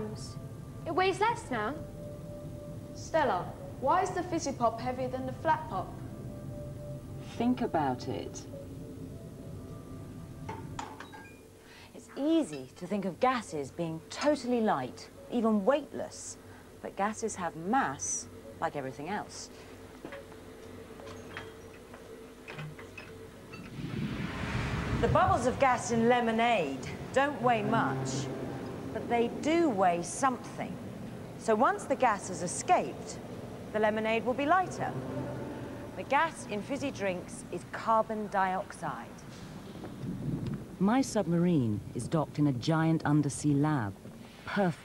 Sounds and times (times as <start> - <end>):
Speech: 12.0 - 19.5, 40.8 - 44.8.